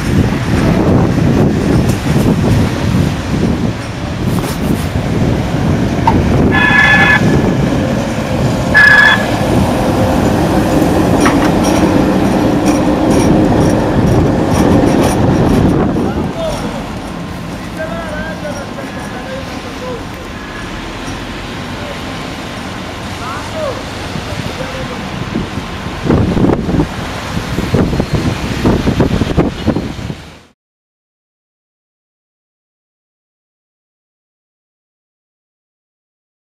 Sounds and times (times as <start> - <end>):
Outside, urban or manmade: 0.0 - 30.6
Train: 0.0 - 30.6
Speech: 16.0 - 16.9, 17.7 - 20.2, 23.2 - 25.2.